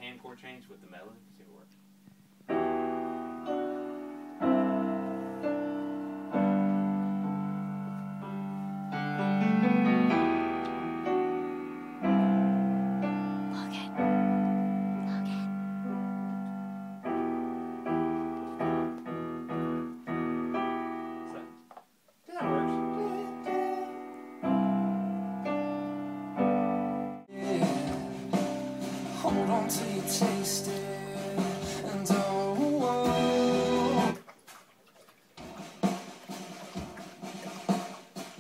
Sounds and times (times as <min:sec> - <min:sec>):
Music: 0:02.4 - 0:21.6, 0:22.4 - 0:34.2, 0:35.4 - 0:38.4.